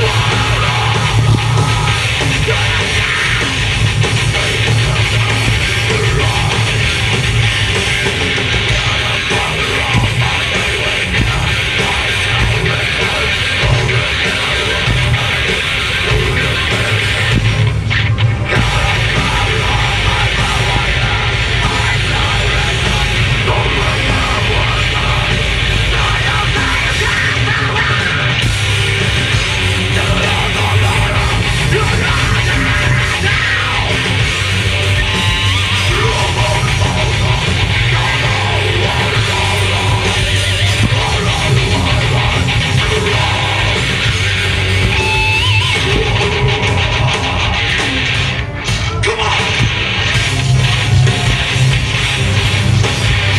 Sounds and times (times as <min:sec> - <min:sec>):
Singing: 0:00.0 - 0:17.6, 0:18.4 - 0:48.1
Heavy metal: 0:00.0 - 0:53.3.